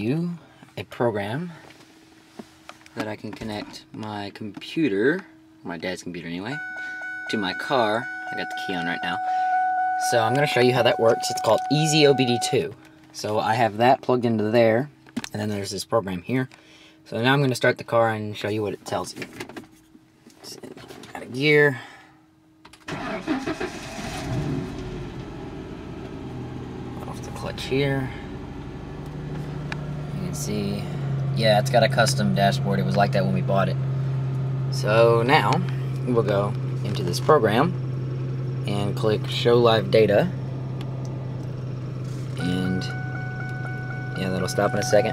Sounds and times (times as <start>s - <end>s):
Speech: 0.0s - 1.6s, 3.0s - 6.6s, 7.3s - 9.2s, 10.0s - 19.3s, 20.4s - 22.0s, 27.0s - 28.2s, 30.1s - 33.8s, 34.7s - 37.8s, 38.7s - 40.4s, 42.4s - 43.0s, 44.2s - 45.1s.